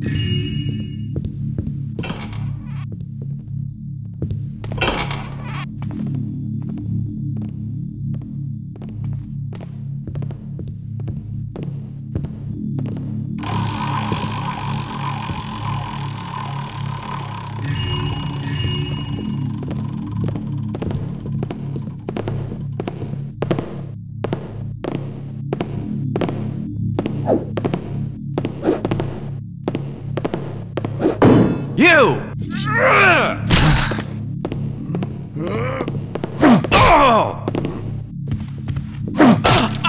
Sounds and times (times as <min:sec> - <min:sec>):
Music: 0:00.0 - 0:39.8
Speech: 0:31.8 - 0:33.5, 0:36.8 - 0:37.5.